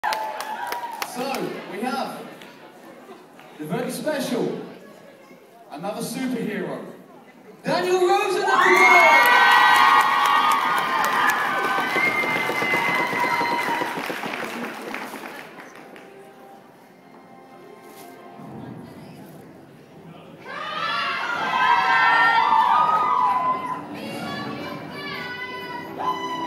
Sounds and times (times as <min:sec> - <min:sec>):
Male speech, man speaking: 0:01.1 - 0:02.3, 0:03.6 - 0:04.7, 0:05.7 - 0:07.0, 0:07.6 - 0:09.1.